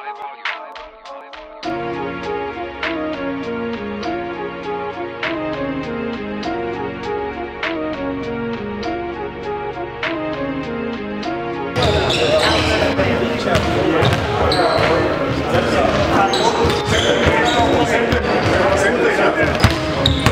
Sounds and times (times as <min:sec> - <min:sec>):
Music: 0:00.0 - 0:20.3
Speech: 0:11.8 - 0:20.3
Basketball bounce: 0:13.6 - 0:15.0, 0:19.5 - 0:20.3.